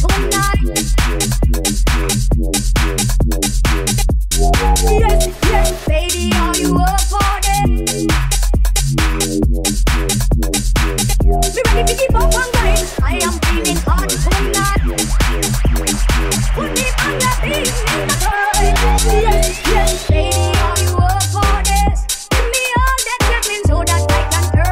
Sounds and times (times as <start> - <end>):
Pop music: 0.0 - 2.0, 4.4 - 8.5, 11.2 - 24.7
House music: 0.0 - 24.7.